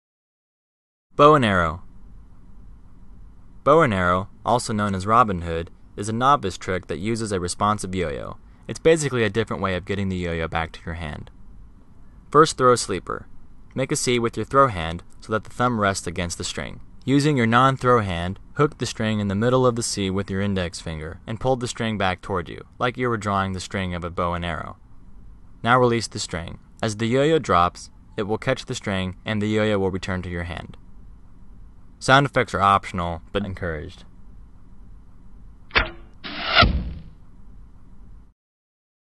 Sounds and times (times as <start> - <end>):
Speech: 1.2 - 1.9, 3.7 - 11.3, 12.3 - 24.8, 25.6 - 30.8, 32.0 - 34.1.